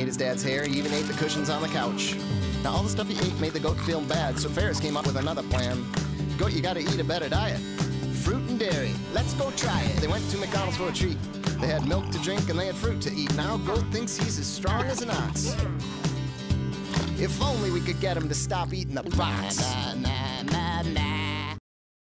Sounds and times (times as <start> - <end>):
Speech: 0.0 - 5.8, 6.4 - 7.6, 8.2 - 15.7, 17.2 - 20.1
Music: 0.0 - 21.6.